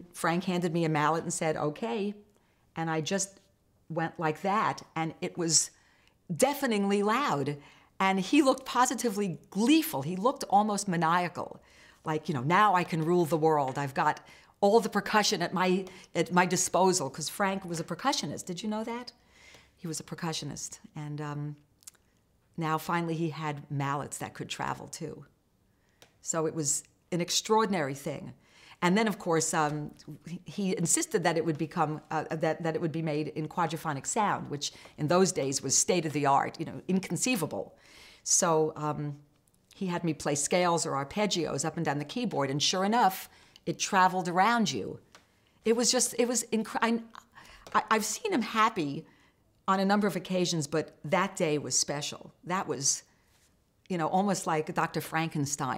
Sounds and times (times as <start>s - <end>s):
Speech: 0.0s - 2.2s, 2.8s - 19.2s, 19.8s - 21.6s, 22.6s - 25.3s, 26.2s - 39.2s, 39.8s - 45.0s, 45.7s - 49.1s, 49.7s - 53.1s, 53.9s - 55.7s.